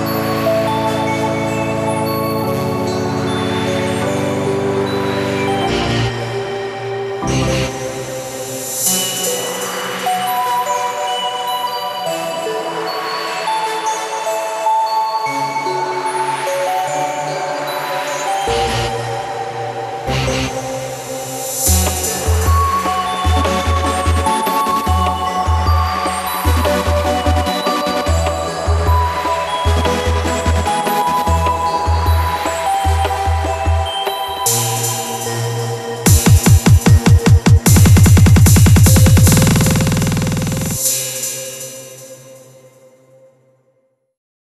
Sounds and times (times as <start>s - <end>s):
Music: 0.0s - 44.2s.